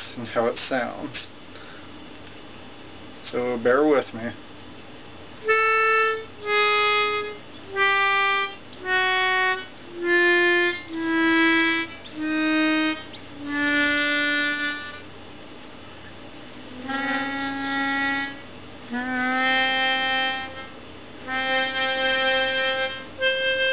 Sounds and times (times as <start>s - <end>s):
Harmonica: 5.4s - 15.1s, 16.6s - 23.7s.